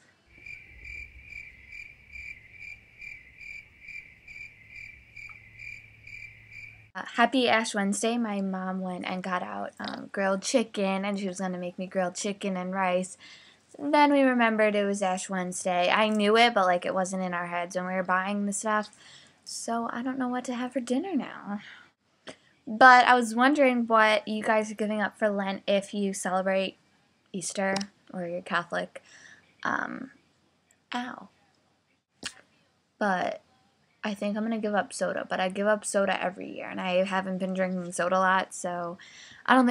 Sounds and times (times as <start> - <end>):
Speech: 7.0 - 21.8, 22.7 - 26.8, 27.4 - 29.0, 29.6 - 30.1, 31.0 - 31.4, 33.0 - 33.5, 34.1 - 39.7.